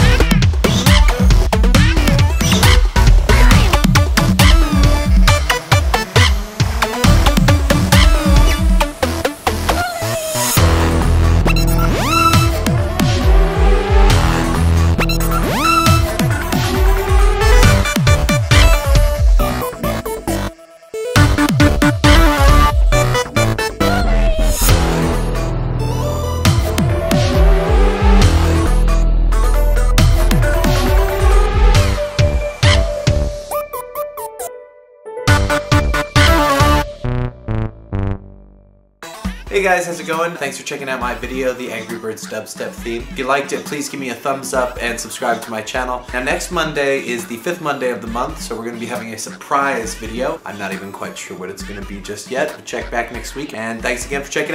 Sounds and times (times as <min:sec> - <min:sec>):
Dubstep: 0:00.0 - 0:32.9, 0:35.3 - 0:36.8.